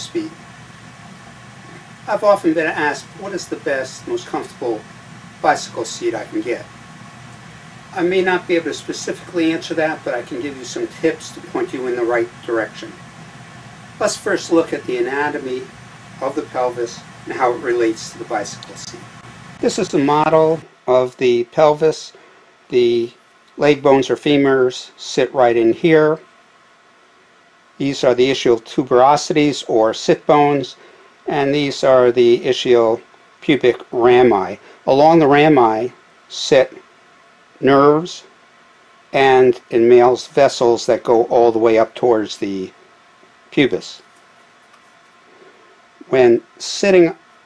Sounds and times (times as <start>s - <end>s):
Speech: 0.0s - 0.4s, 2.1s - 6.7s, 8.0s - 13.0s, 14.0s - 26.3s, 27.8s - 36.8s, 37.6s - 38.3s, 39.1s - 42.8s, 43.5s - 44.1s, 46.0s - 47.2s.